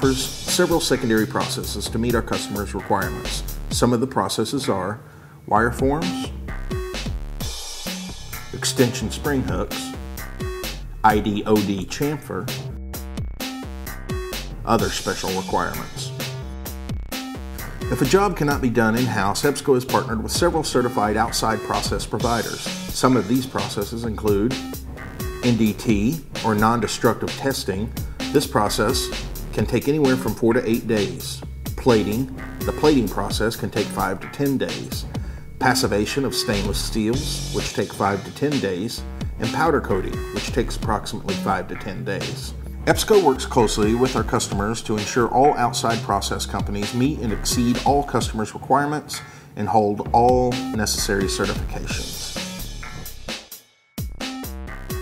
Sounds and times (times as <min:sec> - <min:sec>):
Speech: 0:00.0 - 0:06.4, 0:08.5 - 0:10.0, 0:11.0 - 0:12.6, 0:14.7 - 0:16.2, 0:17.9 - 0:24.6, 0:25.4 - 0:52.4
Music: 0:00.0 - 0:55.0.